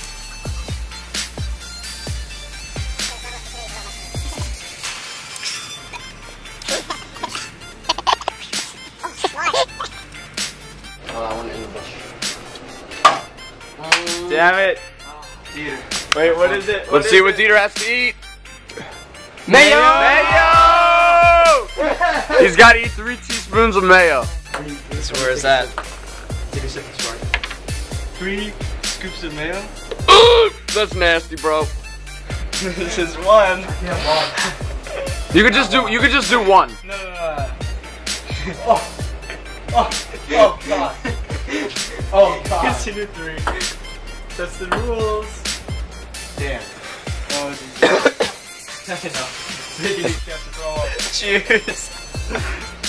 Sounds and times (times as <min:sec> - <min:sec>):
Music: 0:00.0 - 0:52.8.